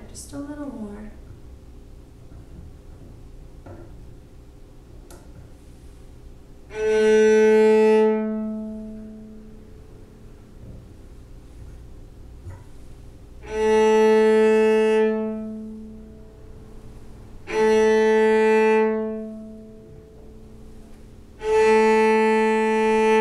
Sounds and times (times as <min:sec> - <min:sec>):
Cello: 0:06.6 - 0:23.2.